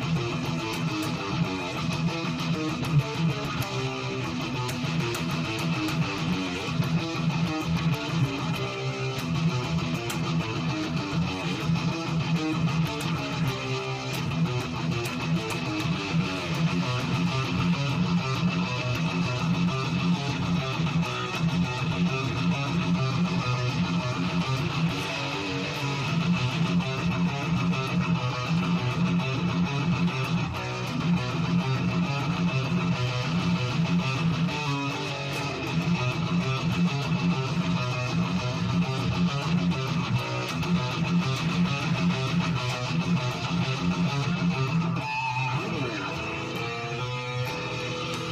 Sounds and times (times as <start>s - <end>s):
Bass guitar: 0.0s - 48.3s.